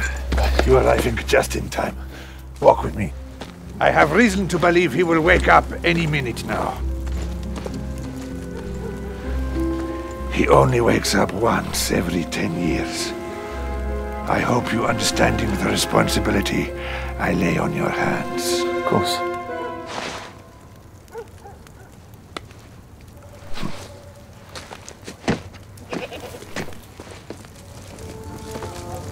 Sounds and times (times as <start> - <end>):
Music: 0.0 - 21.1, 27.6 - 29.1
Speech: 0.4 - 2.0, 2.6 - 3.2, 3.8 - 6.8, 10.3 - 13.1, 14.3 - 19.3.